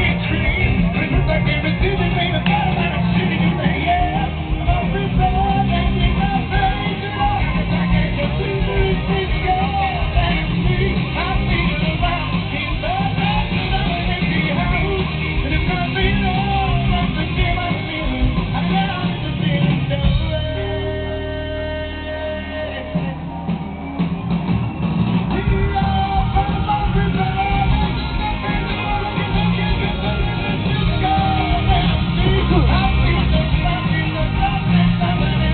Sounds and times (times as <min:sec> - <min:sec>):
Music: 0:00.0 - 0:35.5.